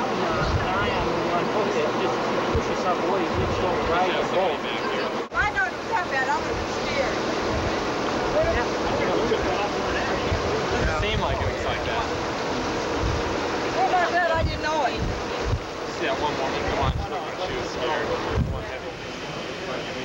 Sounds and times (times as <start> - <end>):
Outside, rural or natural: 0.0 - 20.0.